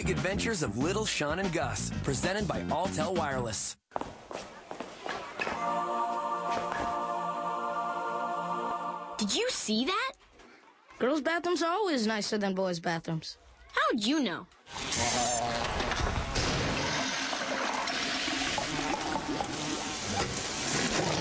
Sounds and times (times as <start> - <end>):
Toilet flush: 15.9 - 21.2
Water: 16.2 - 21.2.